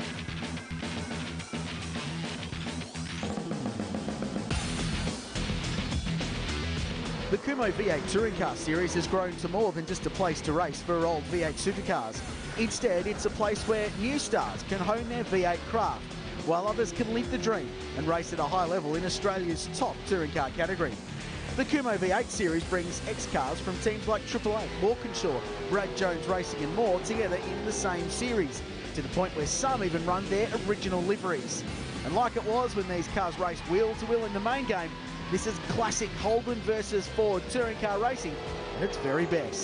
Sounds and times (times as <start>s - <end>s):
Music: 0.0s - 39.6s
Car: 4.4s - 39.6s
Speech: 7.3s - 21.0s, 21.6s - 39.6s.